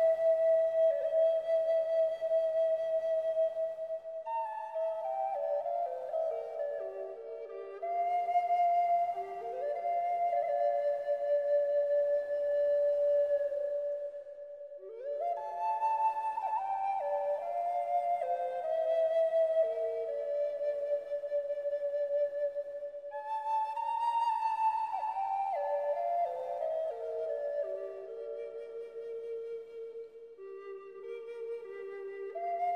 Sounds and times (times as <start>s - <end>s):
Flute: 0.0s - 32.7s.